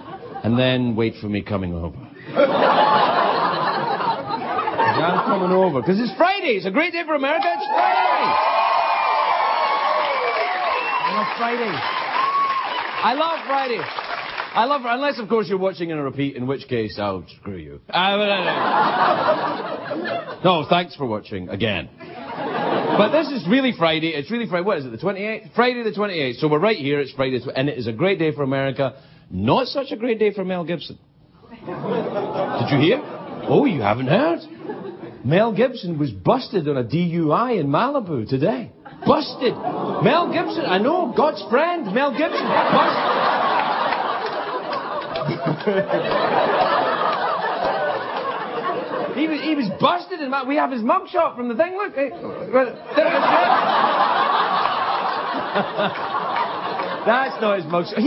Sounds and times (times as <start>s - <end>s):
Narration, monologue: 0.0s - 7.8s, 12.9s - 58.0s.